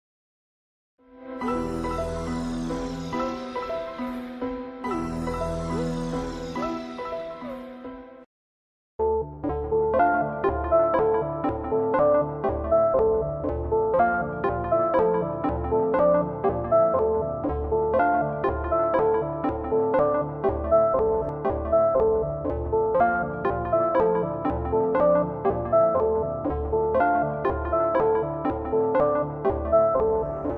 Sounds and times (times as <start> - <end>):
Music: 1.0 - 8.3, 9.0 - 30.5.